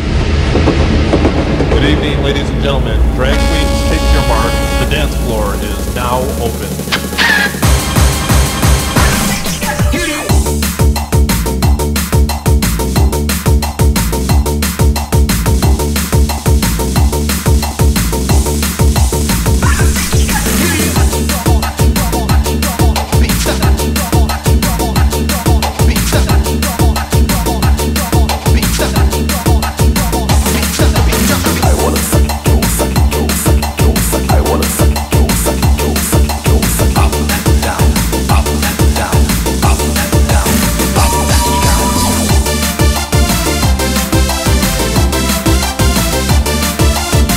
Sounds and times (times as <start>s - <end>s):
Music: 0.0s - 47.3s.